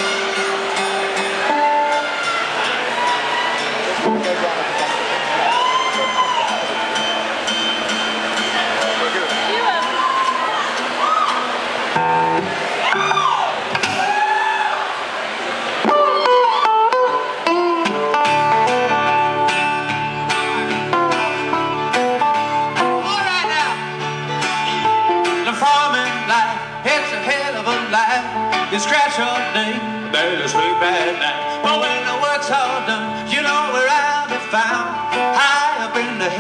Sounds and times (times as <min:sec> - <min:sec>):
Music: 0:00.0 - 0:13.2, 0:15.9 - 0:36.4.